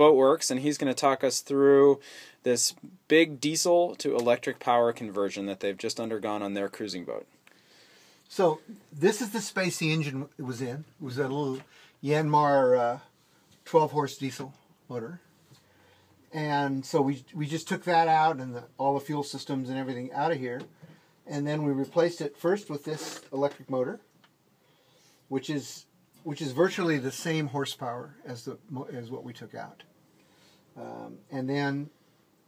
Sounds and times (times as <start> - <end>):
Speech: 0.0 - 7.4, 8.3 - 15.3, 16.3 - 20.7, 21.3 - 24.1, 25.3 - 29.9, 30.8 - 32.0.